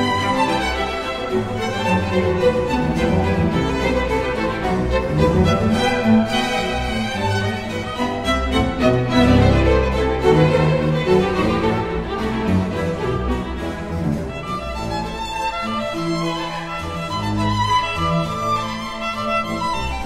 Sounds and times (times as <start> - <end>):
Violin, fiddle: 0.0 - 20.0.